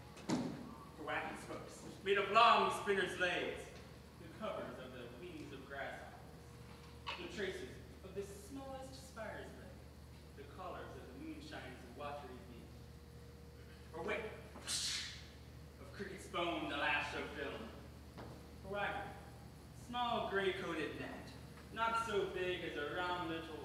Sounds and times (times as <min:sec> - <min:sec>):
Narration, monologue: 0:00.0 - 0:23.6
Male speech, man speaking: 0:01.0 - 0:06.3, 0:07.1 - 0:09.8, 0:10.4 - 0:12.8, 0:13.9 - 0:14.4, 0:15.8 - 0:17.8, 0:18.6 - 0:19.2, 0:19.8 - 0:23.6.